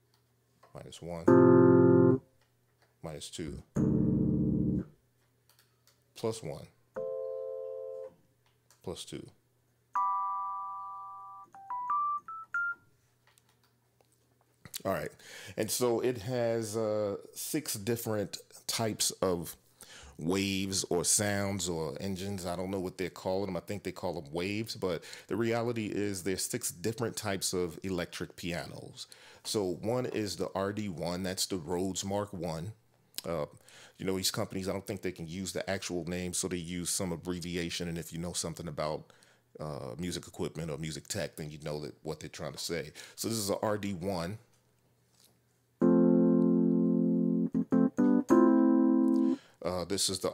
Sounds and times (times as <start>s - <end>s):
Speech: 0.7s - 1.3s, 3.0s - 3.7s, 6.2s - 6.8s, 8.8s - 9.4s, 14.8s - 19.6s, 20.2s - 44.5s, 49.6s - 50.3s
Piano: 1.3s - 2.2s, 45.8s - 49.4s
Synthesizer: 1.3s - 2.2s, 3.8s - 4.8s, 45.8s - 49.4s.